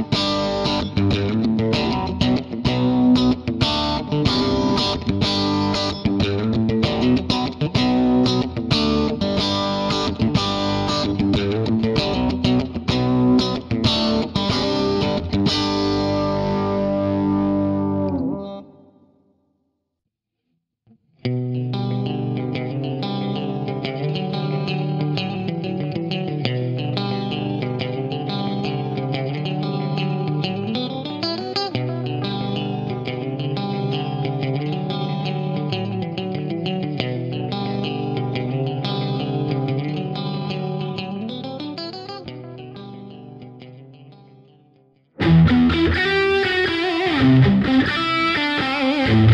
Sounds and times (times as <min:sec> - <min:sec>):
Music: 0:00.0 - 0:19.8, 0:20.9 - 0:49.3.